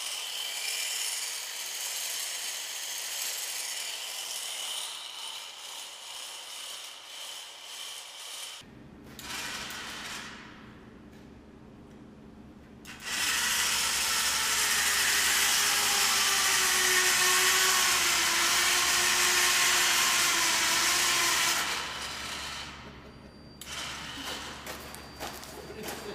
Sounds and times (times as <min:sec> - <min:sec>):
Inside, large room or hall: 0:00.0 - 0:10.9, 0:12.9 - 0:26.1.